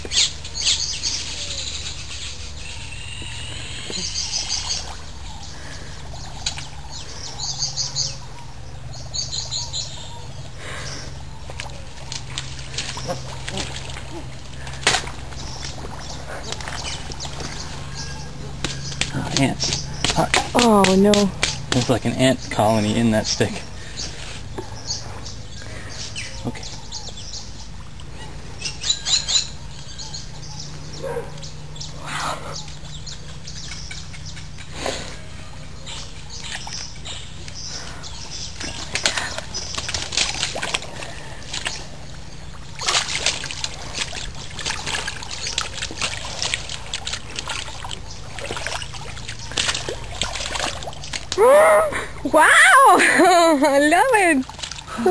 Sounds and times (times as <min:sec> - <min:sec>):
Outside, rural or natural: 0:00.0 - 0:55.1.